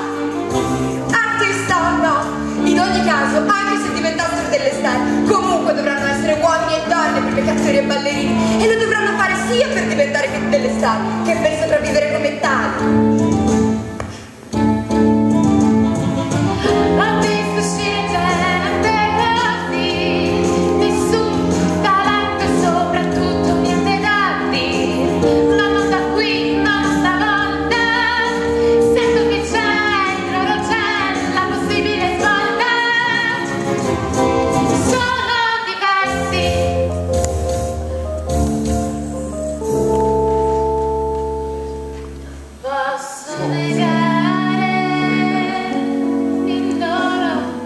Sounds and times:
Music: 0.0s - 47.6s.

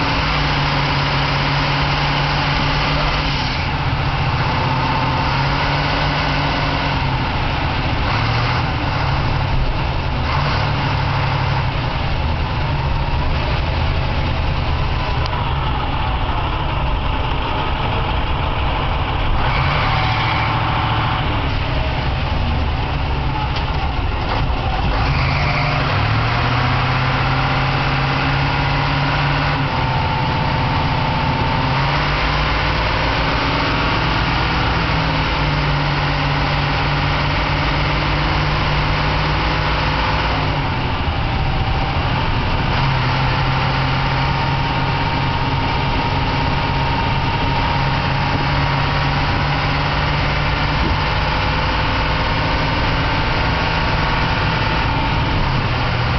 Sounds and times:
Car: 0.0s - 56.1s
Medium engine (mid frequency): 0.0s - 56.1s
Truck: 0.0s - 56.1s.

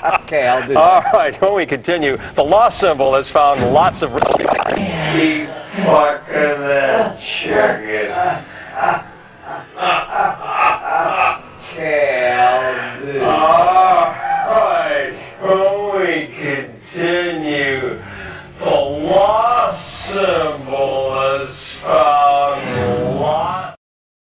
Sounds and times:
Speech: 0.0s - 9.6s, 11.6s - 18.0s, 18.6s - 23.8s.

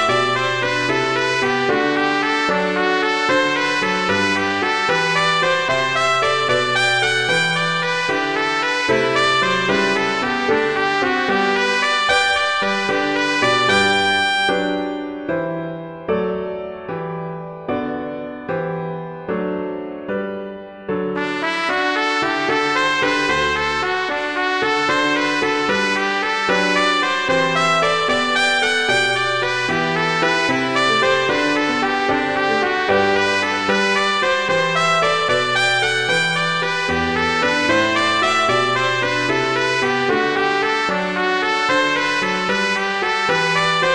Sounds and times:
Trumpet: 0.0s - 15.3s, 21.2s - 43.9s
Jazz: 21.2s - 43.9s.

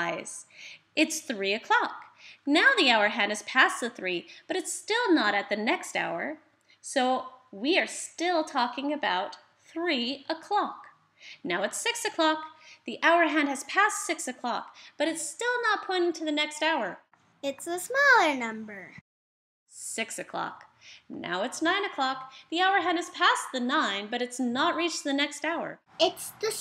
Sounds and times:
Speech: 0.0s - 19.0s, 19.8s - 26.6s.

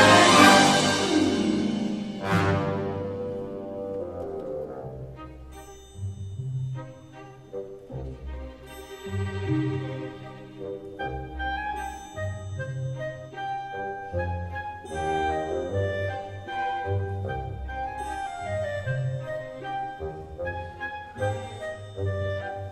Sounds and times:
Music: 0.0s - 22.7s.

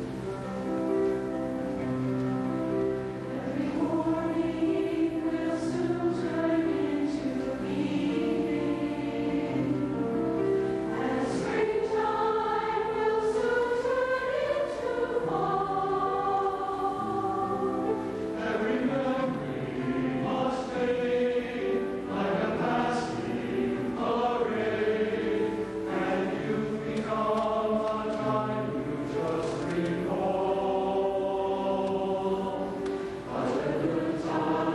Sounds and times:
Music: 0.0s - 34.7s.

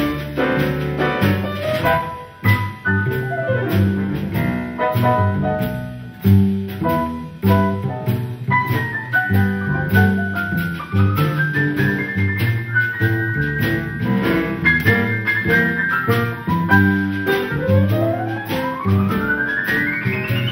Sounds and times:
Jazz: 0.0s - 20.5s.

